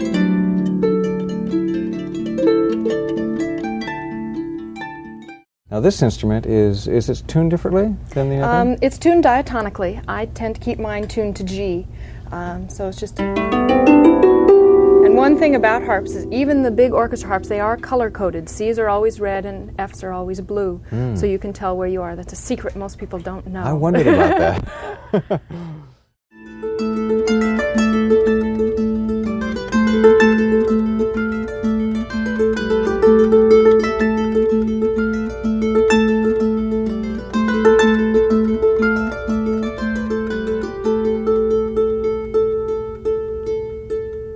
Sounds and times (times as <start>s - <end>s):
Harp: 0.0s - 5.4s, 8.3s - 8.8s, 13.2s - 19.6s, 26.4s - 44.3s
Plucked string instrument: 0.0s - 5.4s, 8.4s - 8.8s, 13.2s - 20.2s, 26.4s - 44.3s
Speech: 5.7s - 13.2s, 15.1s - 24.6s.